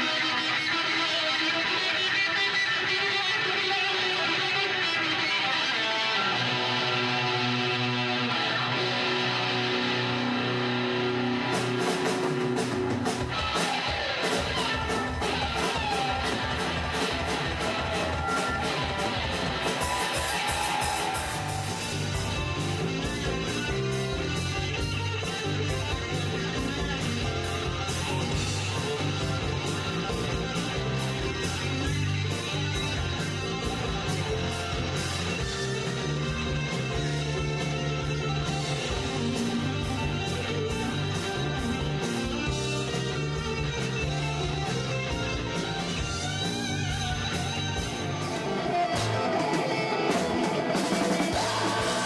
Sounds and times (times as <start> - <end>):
Bass guitar: 0.0 - 52.0
Electric guitar: 0.0 - 52.0.